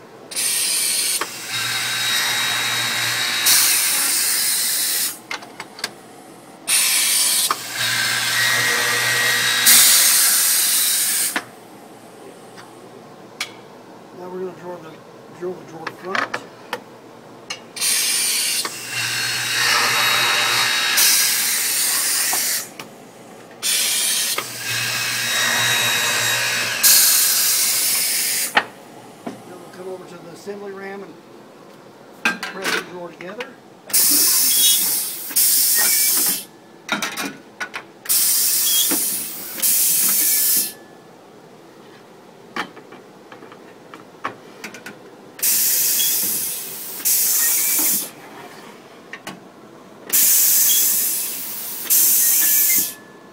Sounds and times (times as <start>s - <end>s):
Speech: 14.2s - 16.4s, 29.5s - 31.2s, 32.5s - 33.6s.